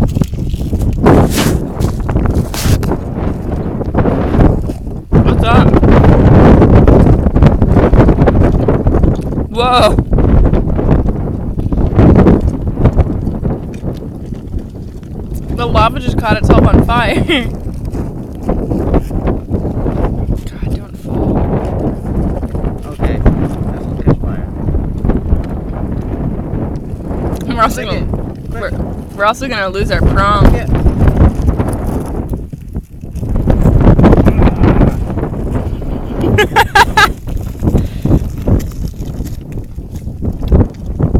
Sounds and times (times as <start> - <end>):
Fire: 0.0 - 41.1
Wind noise (microphone): 0.0 - 41.1.